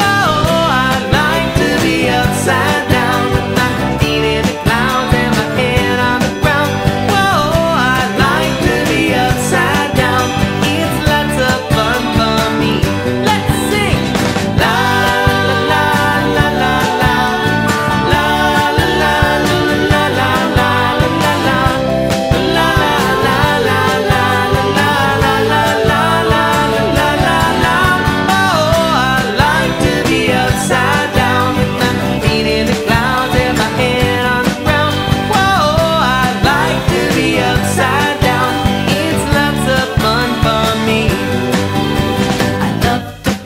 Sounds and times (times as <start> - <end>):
Singing: 0.0 - 41.5
Music: 0.0 - 43.4.